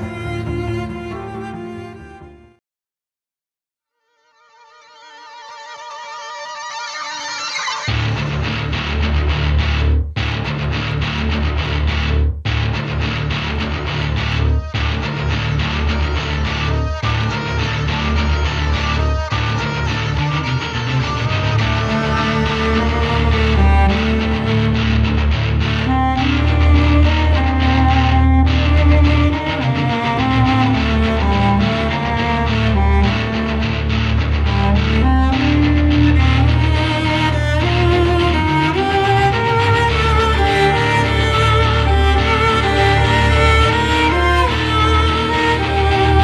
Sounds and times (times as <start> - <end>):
Music: 0.0 - 2.6, 3.8 - 46.2.